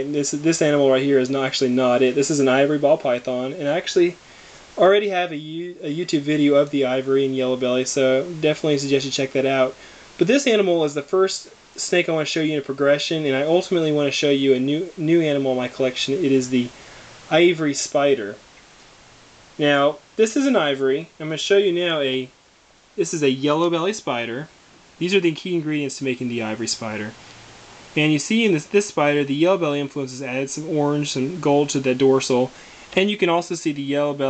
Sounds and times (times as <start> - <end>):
Speech: 0.0 - 4.2, 4.8 - 18.4, 19.6 - 22.4, 23.0 - 27.2, 28.0 - 34.2
Inside, small room: 0.0 - 34.2.